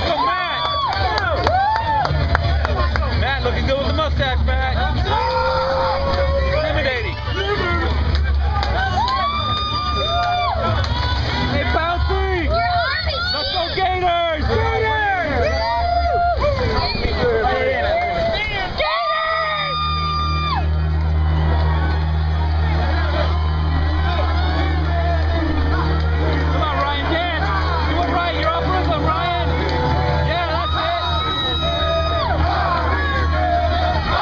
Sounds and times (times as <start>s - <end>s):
Hubbub, speech noise, speech babble: 0.0s - 34.2s
Music: 0.0s - 34.2s.